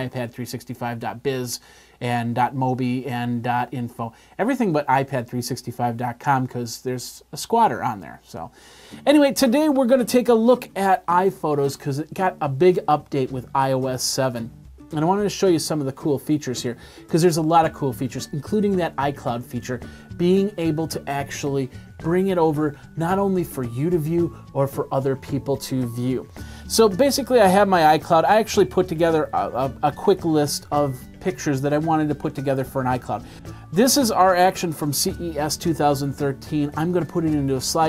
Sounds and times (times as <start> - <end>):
Speech: 0.0 - 37.8.